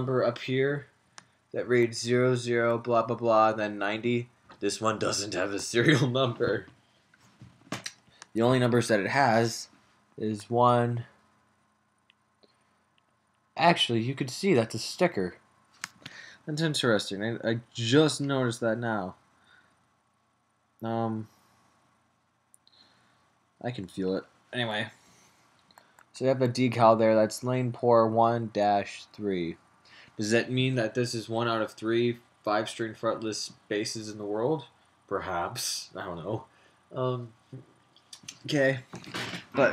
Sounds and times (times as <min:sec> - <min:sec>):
Speech: 0:00.0 - 0:00.9, 0:01.6 - 0:06.7, 0:08.4 - 0:11.1, 0:13.6 - 0:15.4, 0:16.5 - 0:19.2, 0:20.8 - 0:21.3, 0:23.6 - 0:25.0, 0:26.2 - 0:29.6, 0:30.2 - 0:37.4, 0:38.2 - 0:39.7.